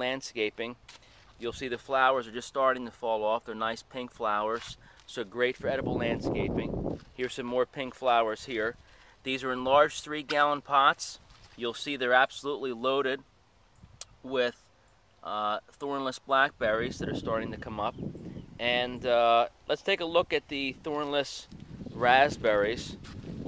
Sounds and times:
Speech: 0.0s - 0.8s, 1.4s - 13.2s, 14.0s - 14.6s, 15.2s - 17.9s, 18.6s - 23.0s.

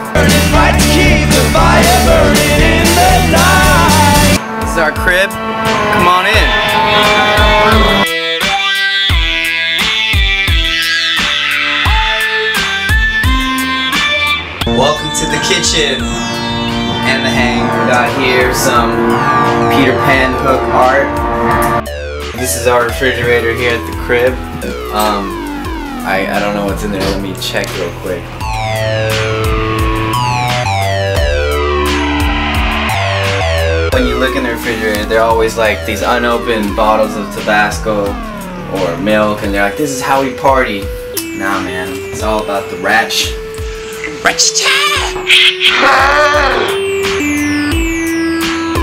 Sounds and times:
Music: 0.0s - 48.8s
Speech: 4.7s - 5.3s, 6.0s - 6.5s, 14.7s - 16.0s, 22.4s - 25.4s, 26.1s - 28.2s, 34.0s - 40.8s.

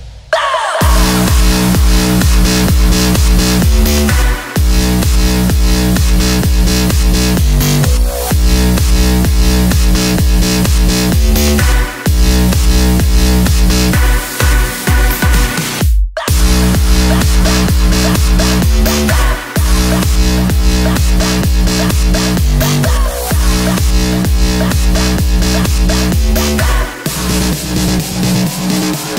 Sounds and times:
Electronic dance music: 0.0s - 29.1s
House music: 0.3s - 29.1s.

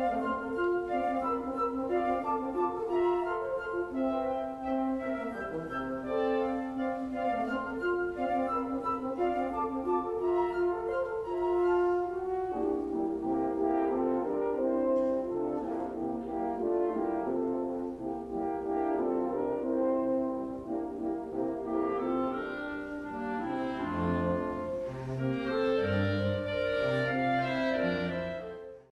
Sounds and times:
Clarinet: 0.0s - 28.9s
French horn: 0.0s - 28.9s.

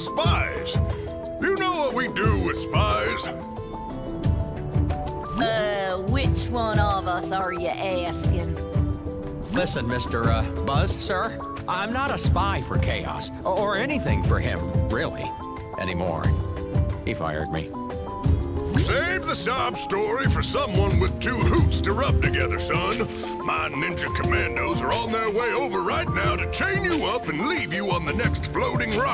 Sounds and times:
Music: 0.0s - 29.1s
Speech: 5.4s - 8.5s, 9.5s - 16.4s, 17.1s - 17.7s, 18.8s - 29.1s.

